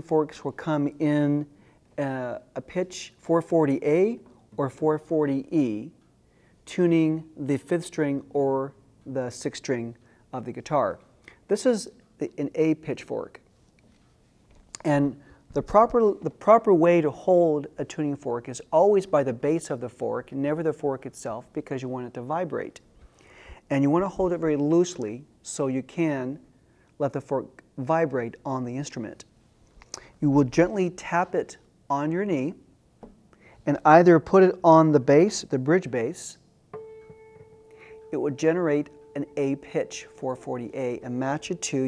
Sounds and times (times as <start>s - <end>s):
Speech: 0.0s - 6.0s, 6.6s - 13.4s, 14.8s - 22.8s, 23.7s - 29.3s, 30.2s - 32.7s, 33.6s - 36.5s, 38.1s - 41.8s.